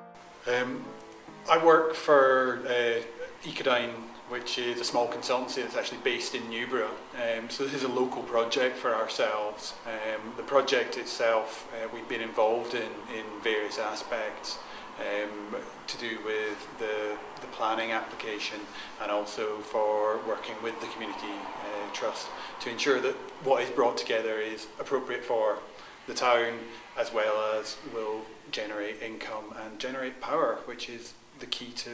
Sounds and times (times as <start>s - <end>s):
Speech: 0.5s - 0.9s, 1.5s - 31.9s.